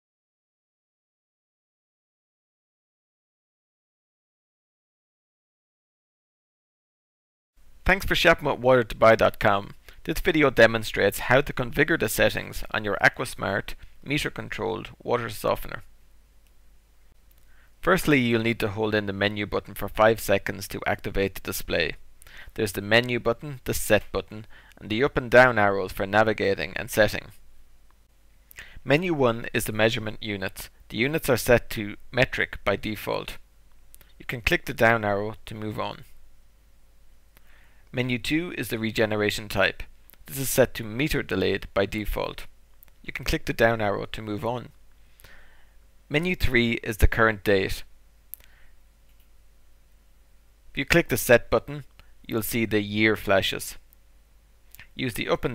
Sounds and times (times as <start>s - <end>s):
Speech: 7.8s - 15.9s, 17.8s - 27.4s, 28.8s - 33.4s, 34.2s - 36.2s, 37.9s - 44.8s, 46.1s - 47.9s, 50.8s - 53.9s, 54.8s - 55.5s.